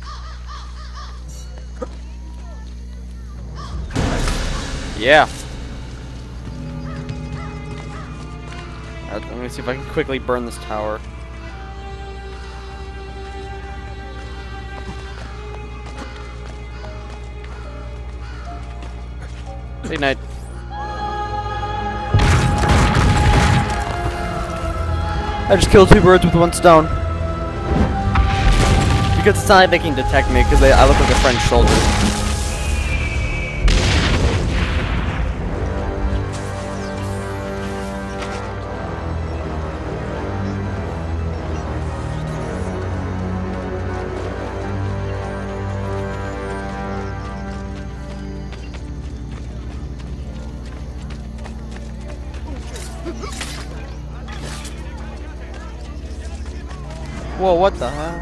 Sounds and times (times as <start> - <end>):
Music: 0.0 - 58.2
Speech: 29.2 - 31.8
Boom: 30.7 - 35.6.